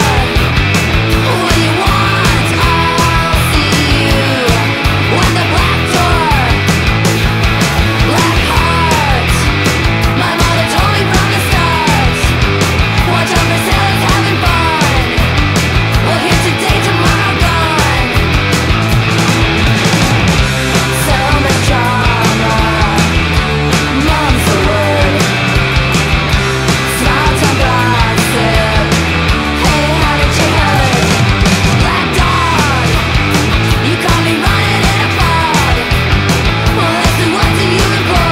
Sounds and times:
Music: 0:00.0 - 0:38.3.

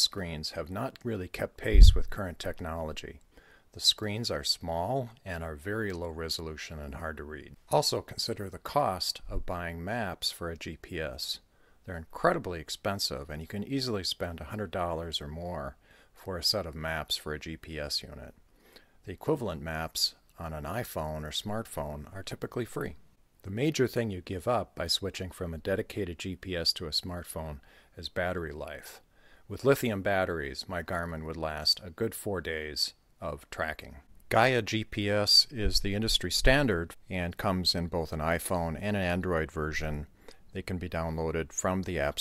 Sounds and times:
Speech: 0:00.0 - 0:03.2, 0:03.8 - 0:18.4, 0:19.0 - 0:42.2.

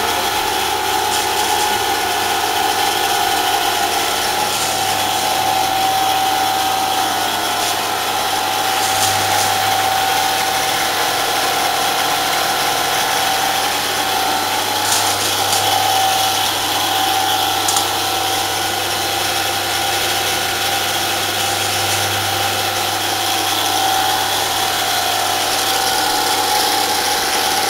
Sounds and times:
Tools: 0:01.1 - 0:01.9, 0:04.0 - 0:06.0, 0:06.9 - 0:08.0, 0:08.6 - 0:09.9, 0:14.8 - 0:16.6, 0:17.6 - 0:18.2, 0:21.4 - 0:22.4.

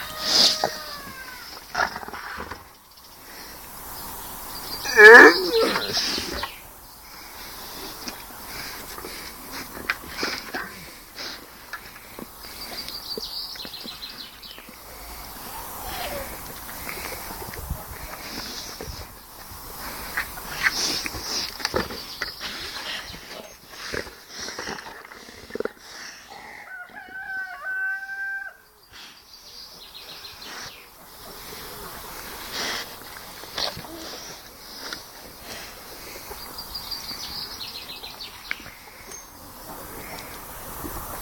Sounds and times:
Crowing, cock-a-doodle-doo: 0:00.0 - 0:01.4, 0:26.6 - 0:28.7.

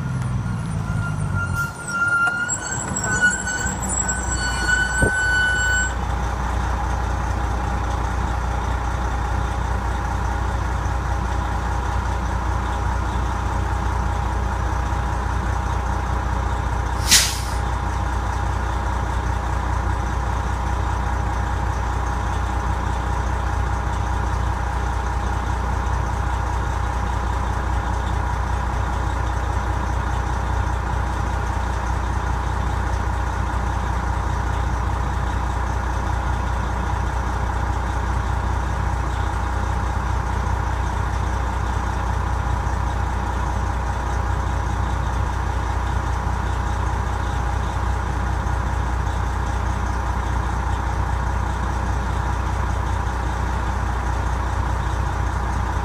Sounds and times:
Vehicle: 0:00.0 - 0:55.8
Idling: 0:05.9 - 0:17.0, 0:17.6 - 0:55.8.

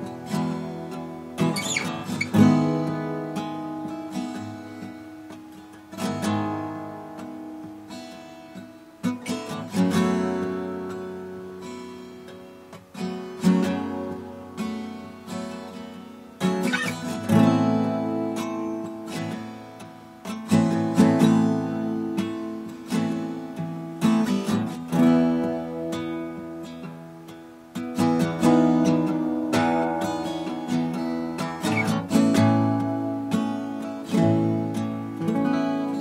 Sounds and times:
Strum: 0:00.0 - 0:36.0.

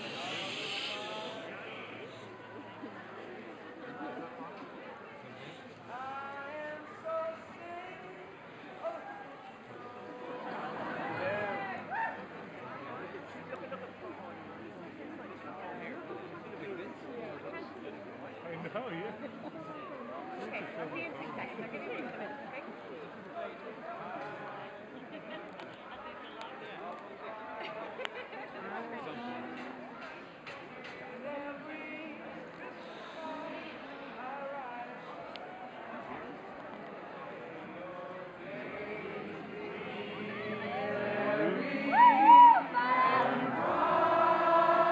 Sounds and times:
Speech: 0:00.0 - 0:38.6
Male singing: 0:05.9 - 0:09.1, 0:09.8 - 0:11.9, 0:27.2 - 0:28.0, 0:31.0 - 0:35.4, 0:37.2 - 0:44.9.

